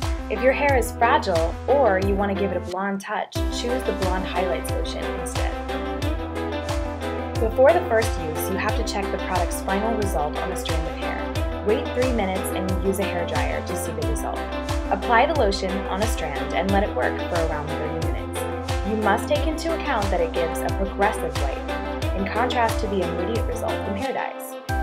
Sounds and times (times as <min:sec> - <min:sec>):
Music: 0:00.0 - 0:24.8
Speech: 0:00.3 - 0:05.6, 0:07.4 - 0:21.6, 0:22.2 - 0:24.6.